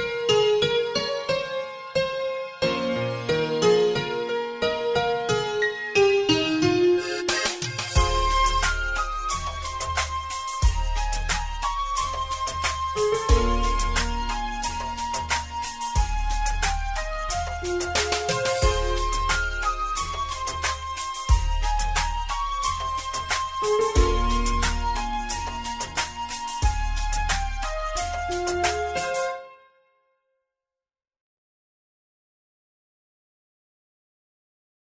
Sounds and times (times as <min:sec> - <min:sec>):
Flute: 0:05.8 - 0:29.6.